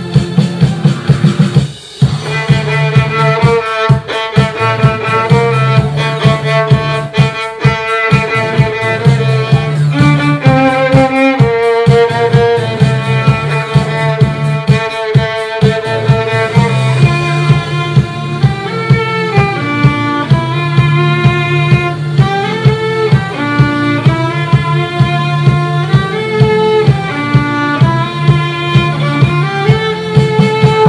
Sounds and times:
Violin, fiddle: 2.1s - 30.8s.

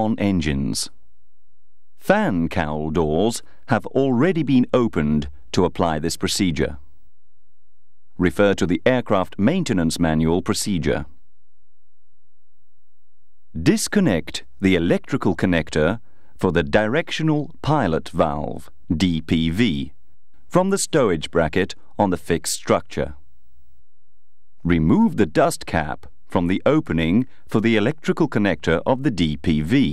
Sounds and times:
Speech: 0.0s - 1.0s, 2.0s - 6.9s, 8.2s - 11.2s, 13.5s - 23.2s, 24.6s - 29.9s.

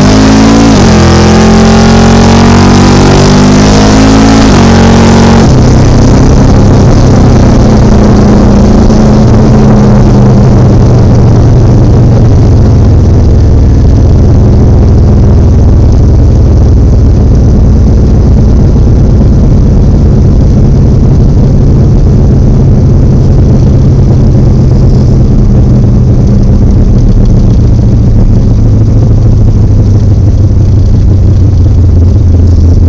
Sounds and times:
Car: 0.0s - 32.8s.

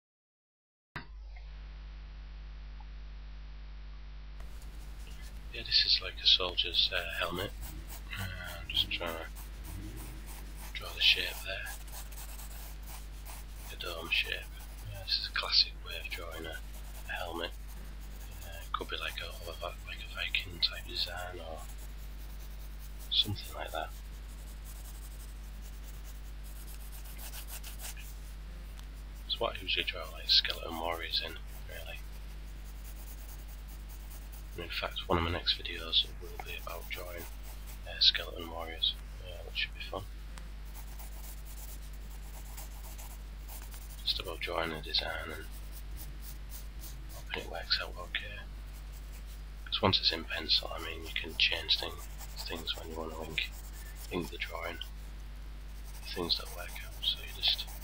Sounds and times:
Speech: 5.5s - 12.0s, 13.6s - 17.6s, 18.3s - 21.7s, 23.1s - 24.0s, 29.3s - 32.0s, 34.6s - 40.1s, 44.0s - 45.6s, 47.1s - 48.5s, 49.7s - 54.9s, 55.9s - 57.8s.

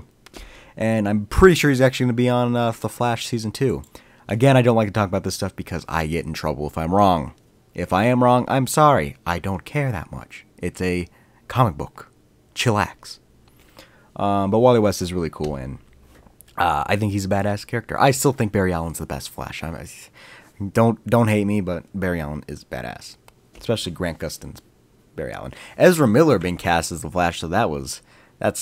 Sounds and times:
Narration, monologue: 0.0s - 28.6s.

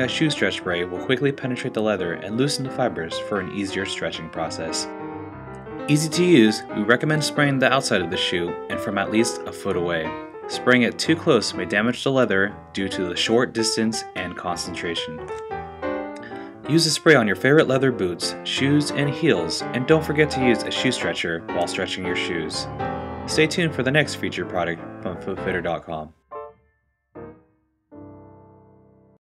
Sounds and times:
Speech: 0.0s - 4.9s, 5.9s - 15.3s, 16.7s - 22.7s, 23.3s - 26.2s
Music: 0.0s - 29.2s.

